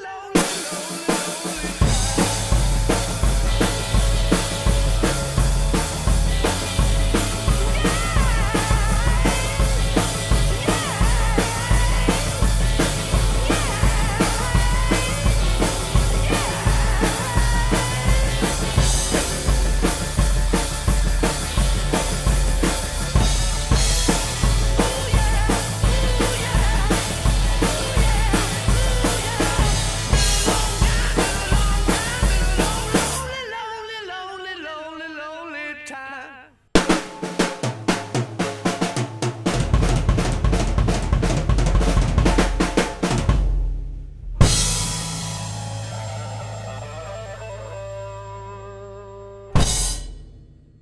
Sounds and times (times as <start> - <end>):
Drum roll: 0.0 - 33.4, 36.8 - 47.3, 49.6 - 50.8.